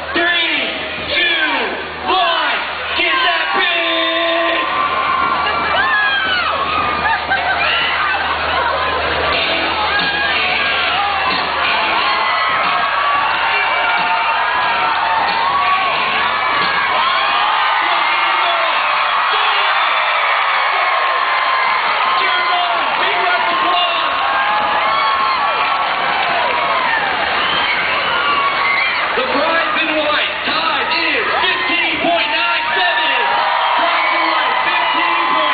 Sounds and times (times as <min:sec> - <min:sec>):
Music: 0:04.7 - 0:17.0.